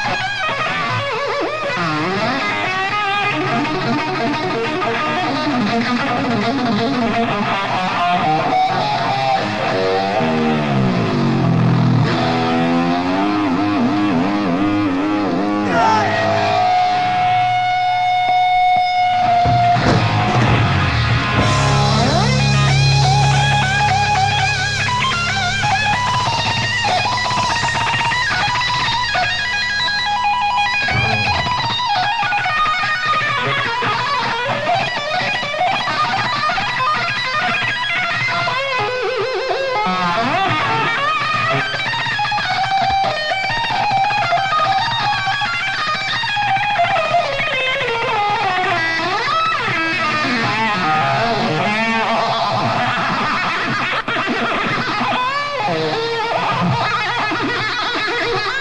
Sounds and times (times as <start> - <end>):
Music: 0.0 - 58.6.